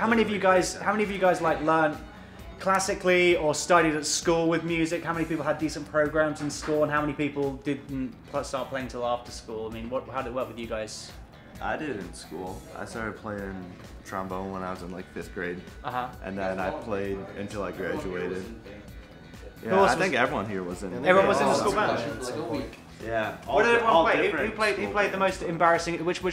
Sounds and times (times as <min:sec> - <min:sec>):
Music: 0:00.0 - 0:26.3.